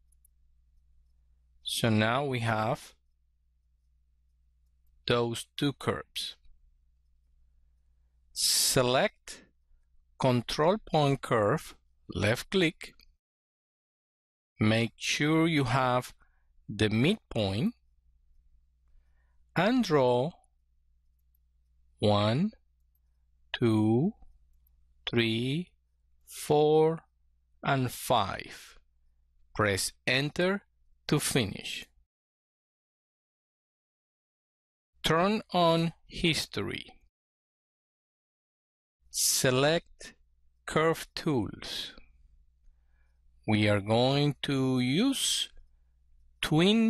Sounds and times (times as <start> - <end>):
Speech: 1.6 - 3.0, 5.0 - 6.5, 8.4 - 9.5, 10.2 - 13.1, 14.6 - 17.8, 19.6 - 20.5, 22.0 - 22.6, 23.6 - 24.2, 25.1 - 28.8, 29.6 - 32.0, 35.0 - 37.1, 39.1 - 42.1, 43.4 - 45.6, 46.4 - 46.9.